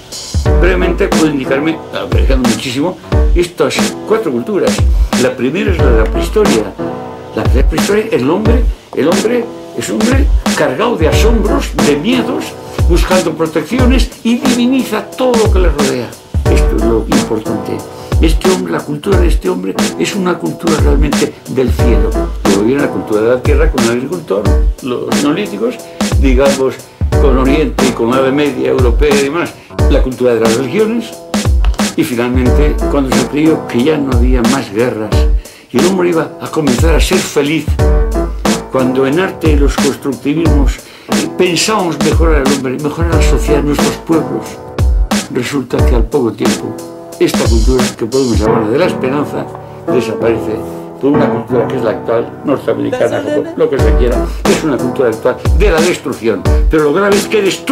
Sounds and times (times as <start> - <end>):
Music: 0.0 - 57.7
Speech: 0.5 - 31.2, 32.0 - 37.8, 38.6 - 44.6, 45.3 - 57.7.